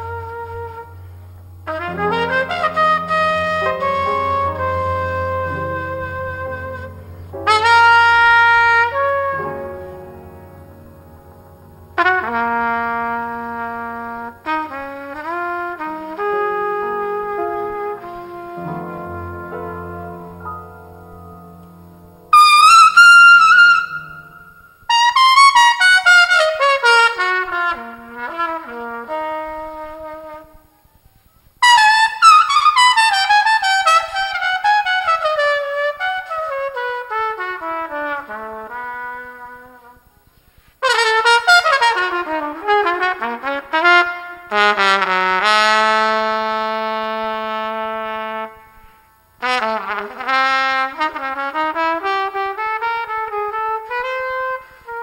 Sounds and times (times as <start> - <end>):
Trumpet: 0.0 - 55.0.